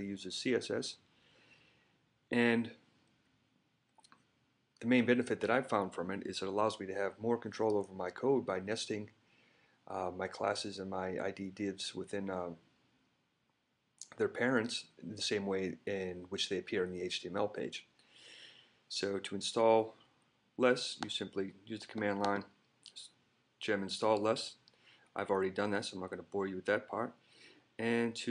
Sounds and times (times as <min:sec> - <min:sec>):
Speech: 0:00.0 - 0:01.0, 0:02.3 - 0:02.8, 0:04.8 - 0:09.2, 0:09.9 - 0:12.7, 0:14.0 - 0:17.9, 0:18.9 - 0:20.0, 0:20.6 - 0:24.6, 0:25.2 - 0:27.2, 0:27.8 - 0:28.3.